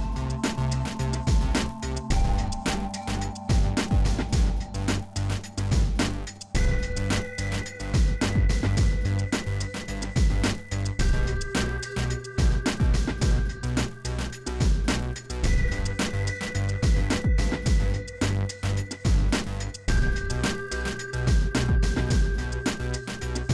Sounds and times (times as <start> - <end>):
Music: 0.0 - 23.5.